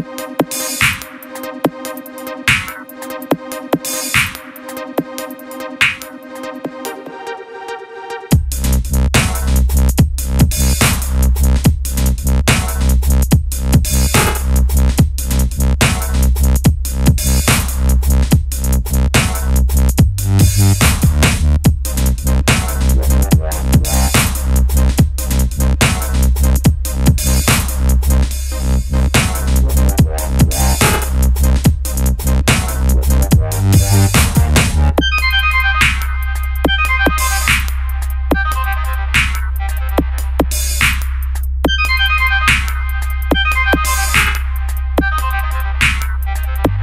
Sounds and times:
Dubstep: 0.0 - 7.5, 8.1 - 46.8.

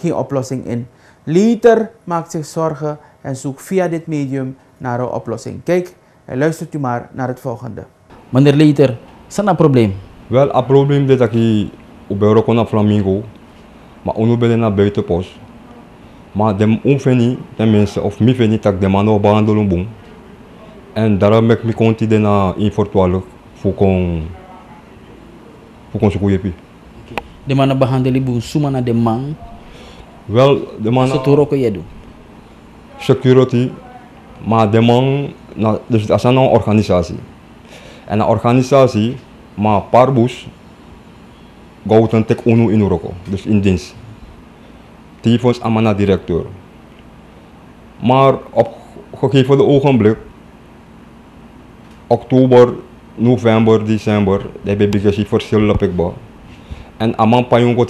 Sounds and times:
Speech: 0.0 - 13.3, 14.0 - 26.6, 27.5 - 32.0, 32.9 - 37.3, 38.1 - 40.6, 41.8 - 44.0, 45.2 - 46.6, 48.0 - 50.3, 52.1 - 56.2, 57.0 - 57.9.

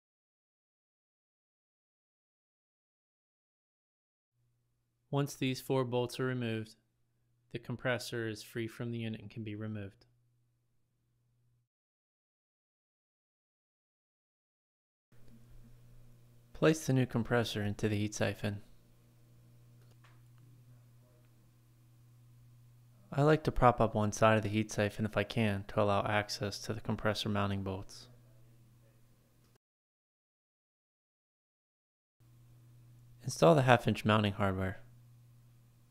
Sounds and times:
Speech: 5.1 - 6.8, 7.5 - 10.1, 16.6 - 18.7, 23.1 - 29.2, 33.2 - 34.9.

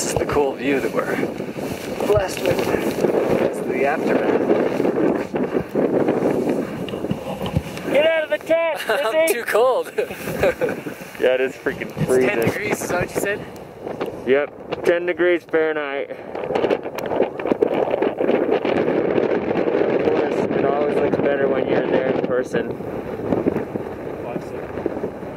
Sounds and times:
Outside, rural or natural: 0.0 - 25.3
Speech: 11.3 - 13.4.

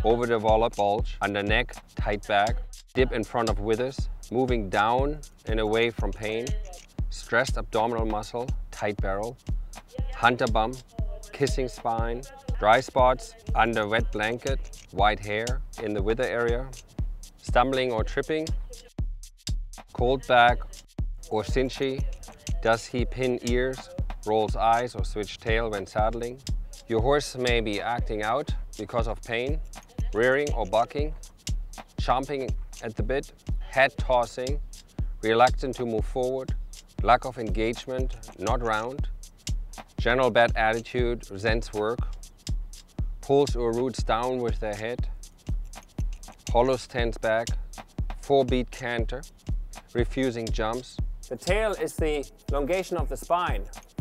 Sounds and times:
Speech: 0.0 - 16.8, 17.4 - 19.0, 20.0 - 31.2, 32.0 - 34.6, 35.2 - 39.1, 40.0 - 42.0, 43.2 - 45.1, 46.5 - 47.6, 48.2 - 49.3, 50.0 - 53.8
Music: 0.0 - 54.0.

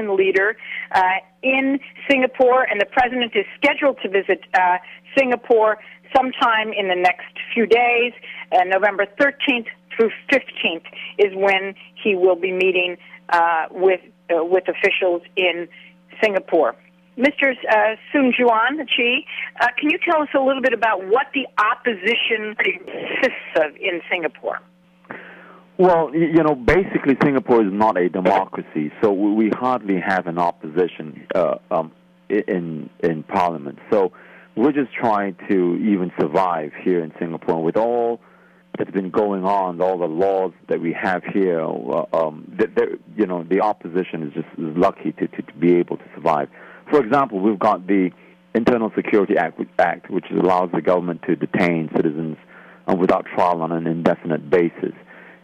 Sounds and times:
Speech: 0.0 - 24.6, 25.8 - 38.2, 38.8 - 55.1
Radio: 0.0 - 55.4.

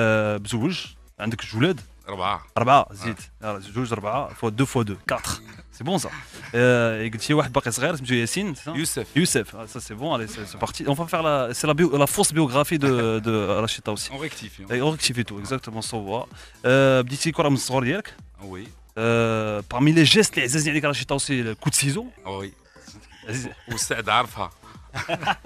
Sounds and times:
Speech: 0.0 - 22.5, 23.3 - 24.5
Music: 0.0 - 25.4.

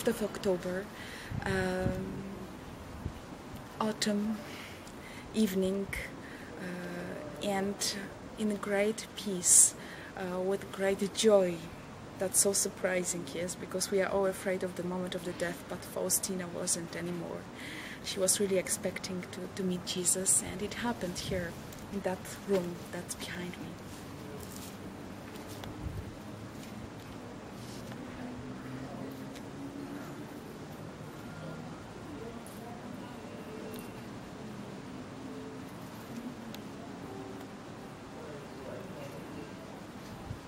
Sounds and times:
Speech: 0.0 - 2.3, 3.8 - 4.4, 5.3 - 23.8.

